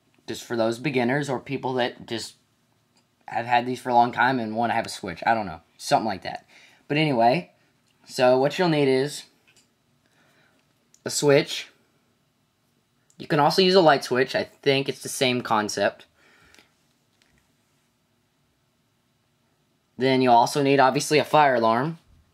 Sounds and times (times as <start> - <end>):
Speech: 0.3 - 2.4, 3.3 - 9.4, 11.0 - 11.8, 13.1 - 16.1, 20.0 - 22.1.